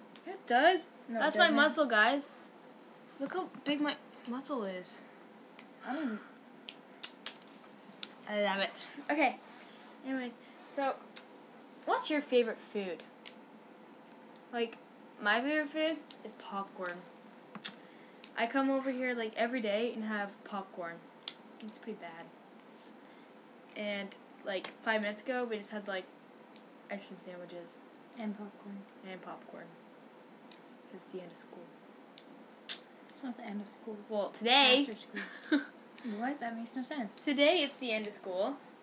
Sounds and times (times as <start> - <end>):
Speech: 0.2 - 2.4, 8.3 - 9.4, 18.4 - 21.0, 21.6 - 22.3, 23.8 - 26.1, 26.9 - 29.7, 30.9 - 31.7, 33.2 - 35.2, 36.0 - 38.6.